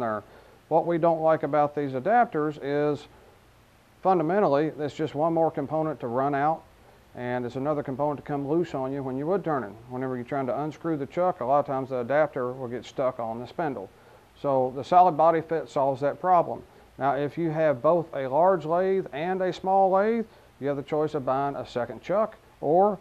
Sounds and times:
Speech: 0.0 - 3.1, 4.0 - 23.0.

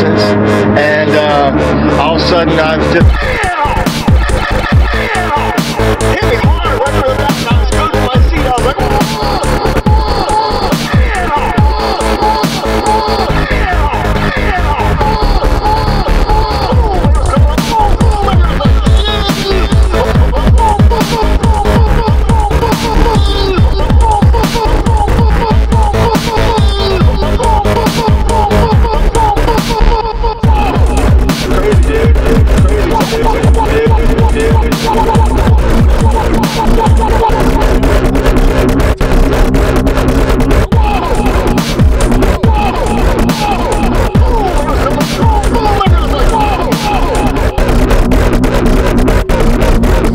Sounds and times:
Dubstep: 0.0 - 50.1.

